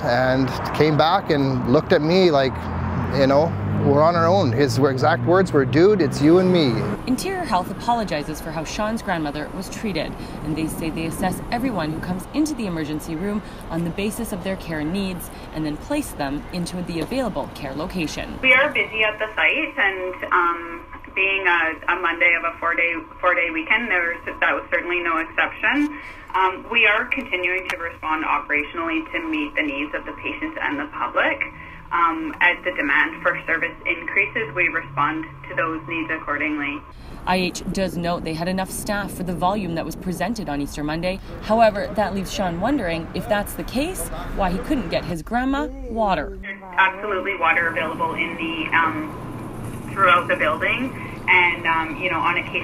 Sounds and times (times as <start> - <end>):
Speech: 3.1 - 49.1, 50.0 - 52.6
Radio: 18.4 - 39.2, 46.1 - 49.2, 49.9 - 52.6.